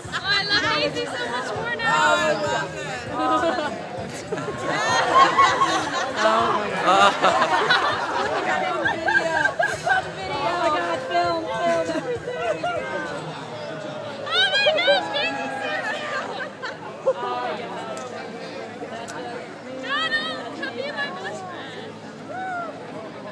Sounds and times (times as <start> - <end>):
Chatter: 0.0 - 23.3.